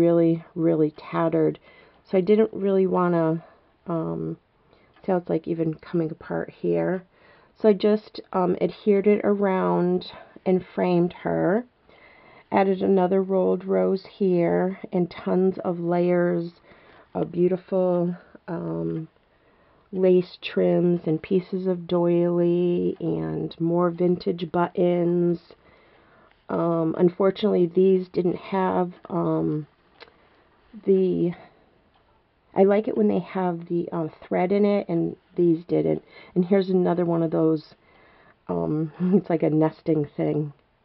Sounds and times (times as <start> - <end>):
Speech: 0.0 - 4.4, 5.0 - 11.7, 12.5 - 16.6, 17.2 - 19.1, 20.0 - 25.6, 26.5 - 29.7, 30.7 - 31.5, 32.6 - 37.8, 38.5 - 40.6.